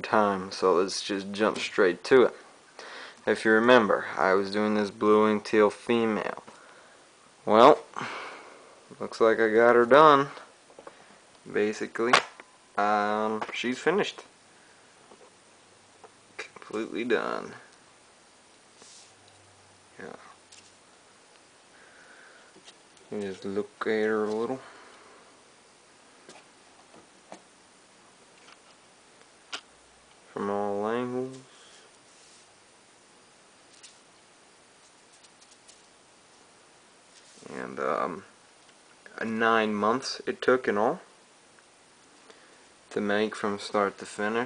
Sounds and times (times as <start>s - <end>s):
Speech: 0.0s - 2.4s, 3.3s - 6.4s, 7.5s - 7.9s, 8.9s - 10.5s, 11.5s - 12.2s, 12.8s - 14.3s, 16.4s - 17.7s, 20.0s - 20.3s, 23.1s - 24.6s, 30.3s - 31.5s, 37.4s - 38.3s, 39.0s - 41.1s, 42.9s - 44.4s.